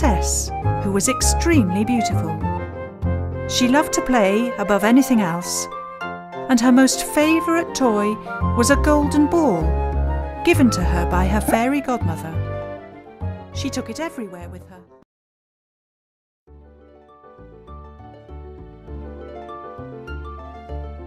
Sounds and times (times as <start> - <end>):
Speech: 0.0 - 2.4, 3.5 - 5.7, 6.5 - 9.8, 10.5 - 12.4, 13.6 - 14.9
Music: 0.0 - 15.1, 16.5 - 21.0.